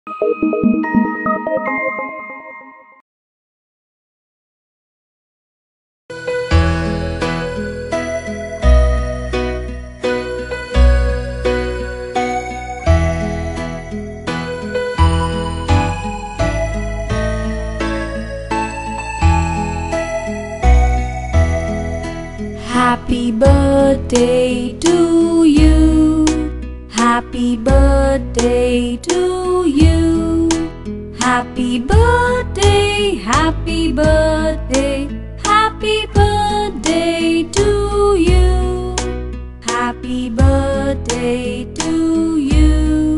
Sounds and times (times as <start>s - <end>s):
Music: 0.1s - 3.0s, 6.1s - 43.1s.